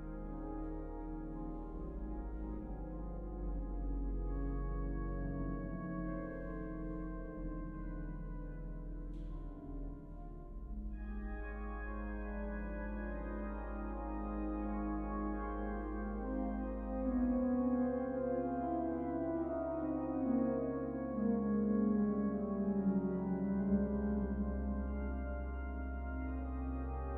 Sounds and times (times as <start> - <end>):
Piano: 0.0 - 27.1.